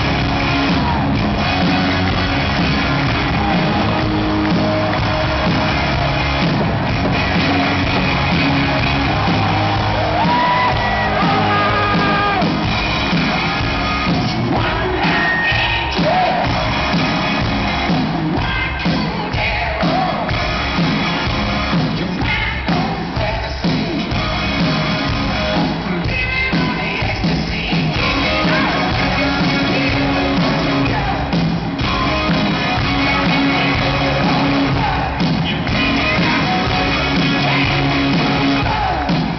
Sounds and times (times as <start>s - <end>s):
Music: 0.0s - 39.3s.